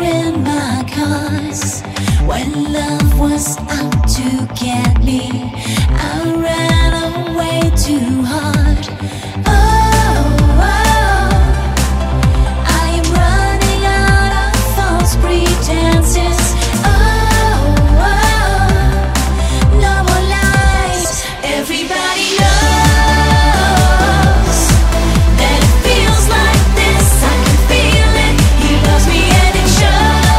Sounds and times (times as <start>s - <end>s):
Tender music: 0.0s - 30.3s.